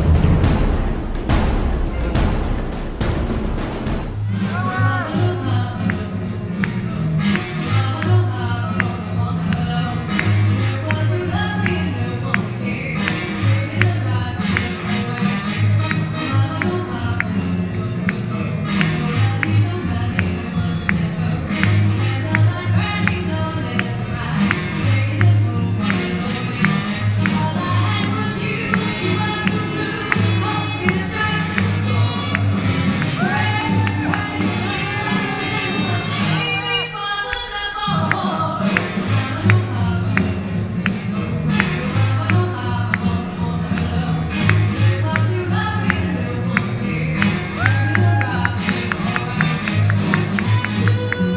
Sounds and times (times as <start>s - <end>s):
Music of Latin America: 0.0s - 51.3s.